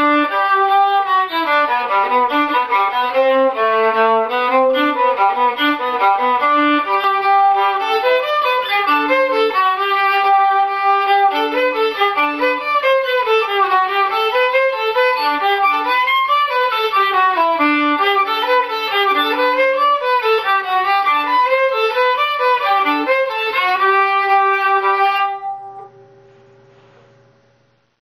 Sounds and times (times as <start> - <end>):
Violin, fiddle: 0.0 - 25.9.